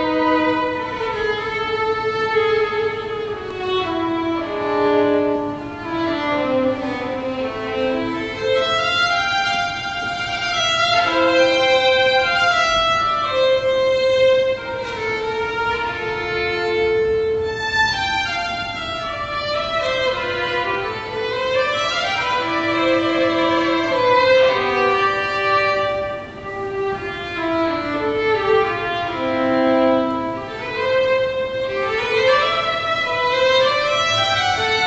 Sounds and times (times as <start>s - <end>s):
Violin, fiddle: 0.0s - 34.8s.